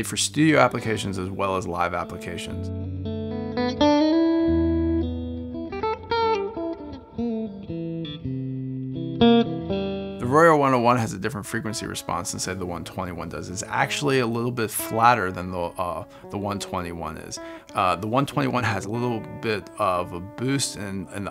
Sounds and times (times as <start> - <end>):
Speech: 0.0 - 2.7, 10.2 - 21.3
Music: 0.0 - 21.3.